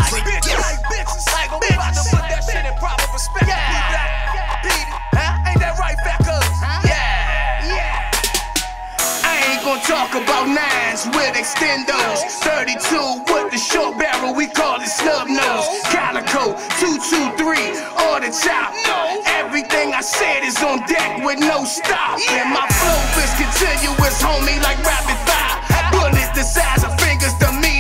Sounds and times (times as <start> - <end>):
Music: 0.0 - 27.8.